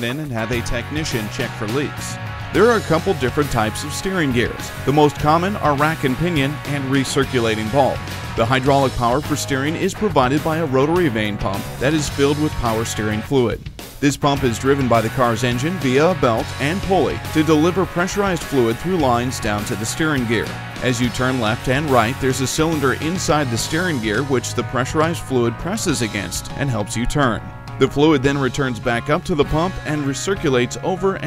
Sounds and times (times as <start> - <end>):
Music: 0.0 - 31.2
Speech: 0.0 - 31.2.